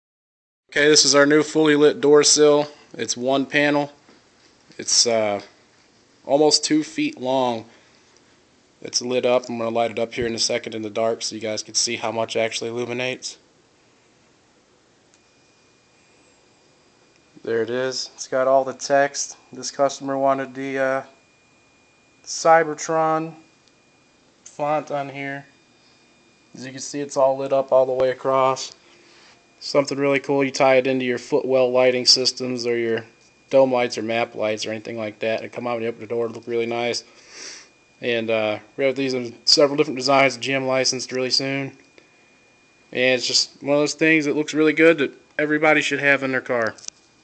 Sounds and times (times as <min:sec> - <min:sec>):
Speech: 0:00.7 - 0:04.0, 0:04.8 - 0:05.6, 0:06.3 - 0:07.7, 0:08.8 - 0:13.5, 0:17.4 - 0:21.2, 0:22.3 - 0:23.5, 0:24.5 - 0:25.6, 0:26.6 - 0:28.8, 0:29.6 - 0:37.1, 0:38.0 - 0:41.8, 0:42.9 - 0:46.8.